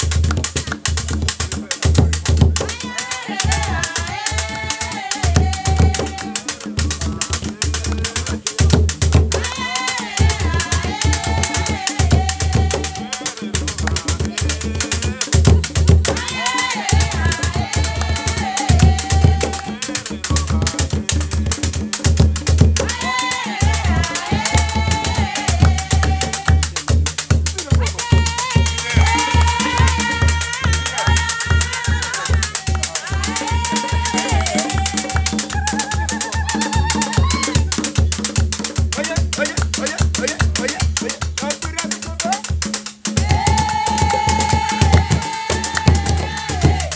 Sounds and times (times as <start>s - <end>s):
Music: 0.0s - 46.9s
Female singing: 2.7s - 6.6s, 9.4s - 13.4s, 15.4s - 19.8s, 22.8s - 26.7s, 27.8s - 37.9s, 43.2s - 46.9s.